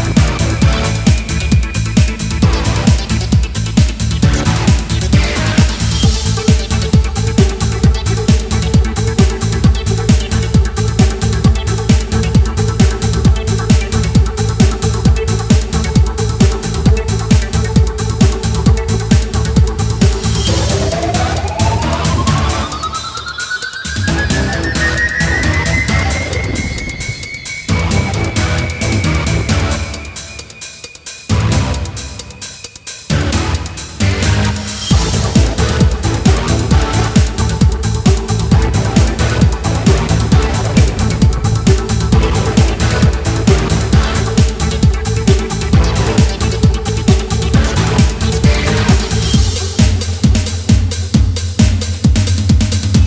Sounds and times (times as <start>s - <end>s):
Music: 0.0s - 53.0s.